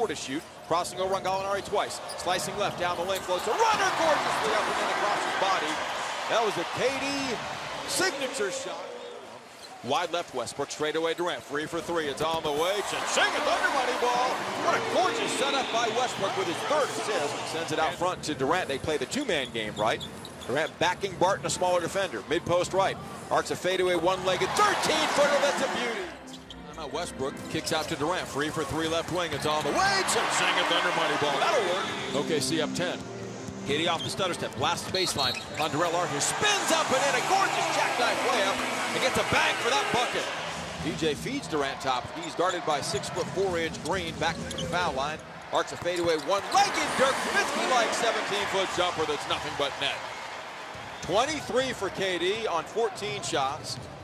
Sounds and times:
Speech: 0:00.0 - 0:09.0, 0:09.8 - 0:33.0, 0:33.7 - 0:50.0, 0:51.1 - 0:53.8
Music: 0:31.8 - 0:34.1.

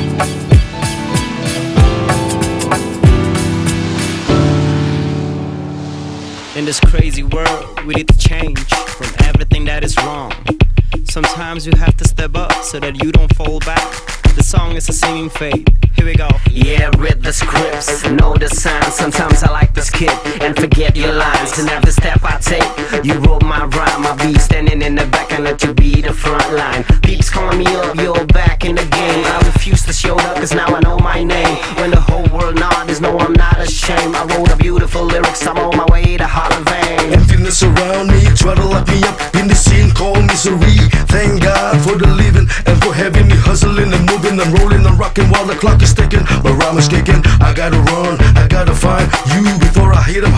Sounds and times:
Hip hop music: 0:00.0 - 0:50.3.

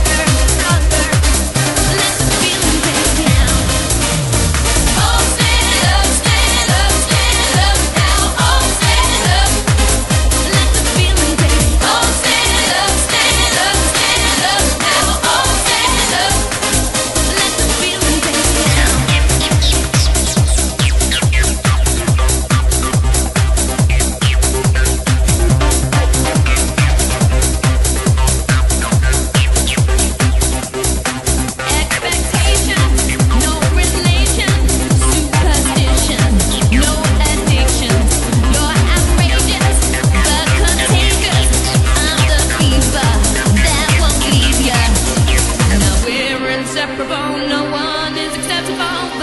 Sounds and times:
Trance music: 0:00.0 - 0:49.2.

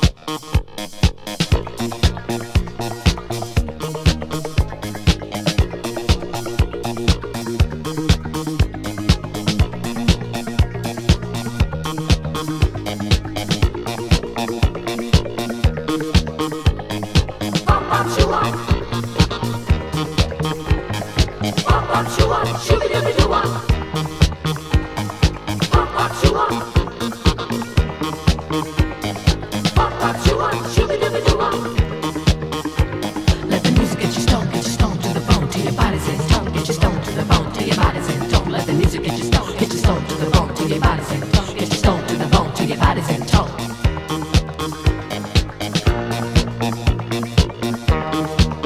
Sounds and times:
Drum kit: 0:00.0 - 0:48.6.

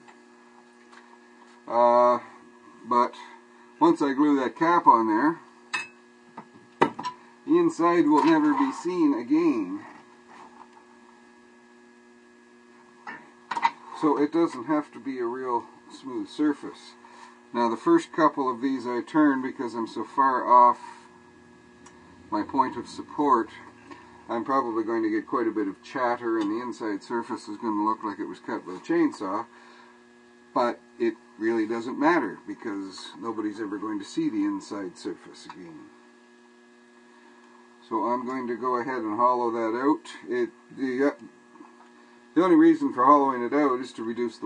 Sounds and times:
Hum: 0:00.0 - 0:42.6.

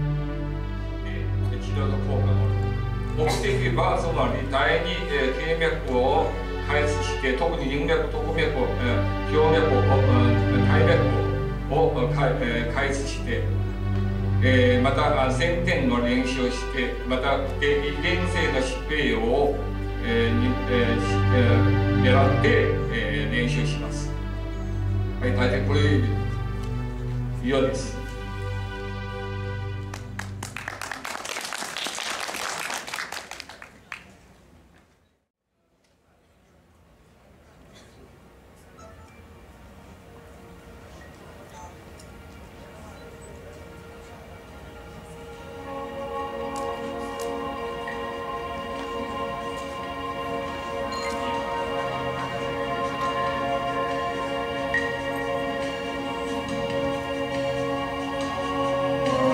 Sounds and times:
Music: 0:00.0 - 0:33.3, 0:38.3 - 0:59.3
Speech: 0:01.1 - 0:02.5, 0:03.2 - 0:13.5, 0:14.4 - 0:24.1, 0:25.2 - 0:26.1.

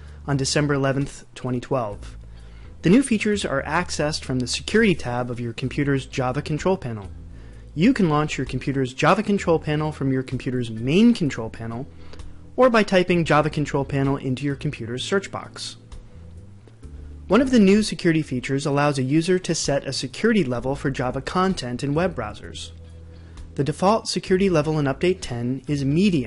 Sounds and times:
Speech: 0:00.3 - 0:02.1, 0:02.8 - 0:07.1, 0:07.8 - 0:11.9, 0:12.6 - 0:15.8, 0:17.3 - 0:22.8, 0:23.6 - 0:26.2.

